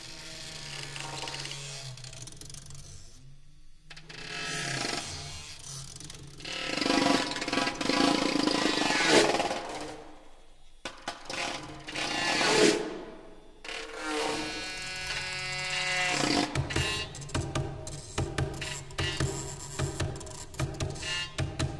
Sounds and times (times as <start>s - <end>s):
Percussion: 16.2s - 21.7s.